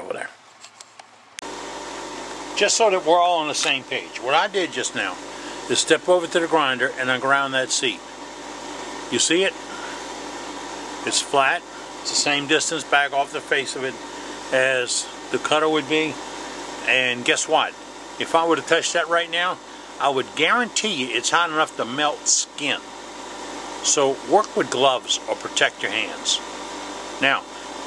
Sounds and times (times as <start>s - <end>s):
Speech: 0.0s - 0.4s, 2.6s - 8.0s, 9.1s - 9.6s, 11.0s - 16.2s, 16.8s - 22.8s, 23.8s - 26.4s, 27.2s - 27.5s.